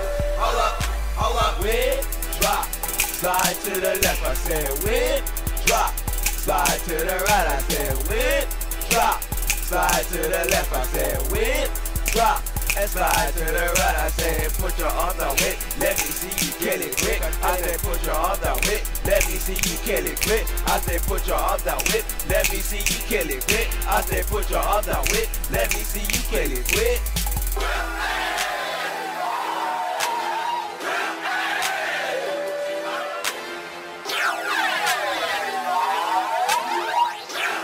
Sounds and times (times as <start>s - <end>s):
Music: 0.0s - 37.6s.